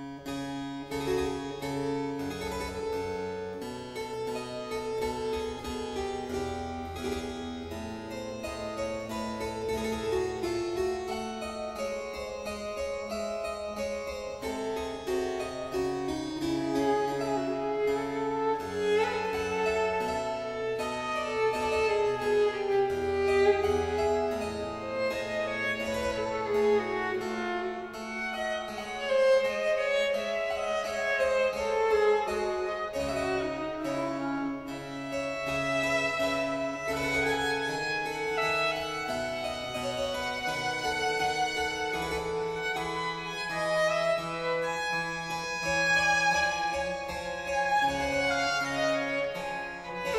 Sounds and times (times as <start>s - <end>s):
Violin, fiddle: 0.0s - 50.1s.